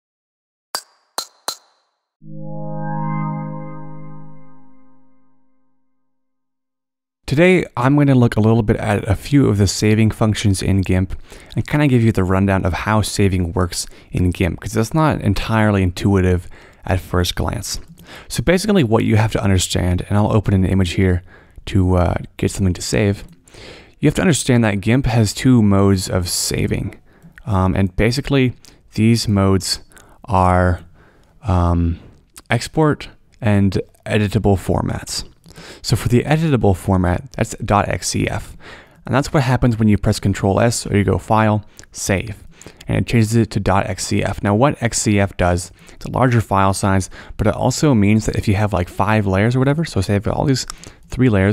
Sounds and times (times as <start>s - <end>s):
Music: 2.2s - 5.8s
Speech: 7.3s - 23.3s, 24.0s - 51.5s.